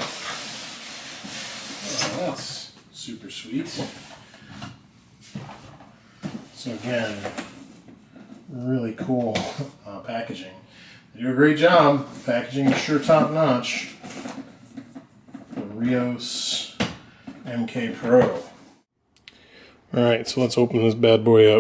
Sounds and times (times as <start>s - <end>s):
Inside, small room: 0.0s - 21.6s
Speech: 1.8s - 4.0s, 6.6s - 7.4s, 8.5s - 10.6s, 11.2s - 14.0s, 15.6s - 16.8s, 17.4s - 18.6s, 19.9s - 21.6s.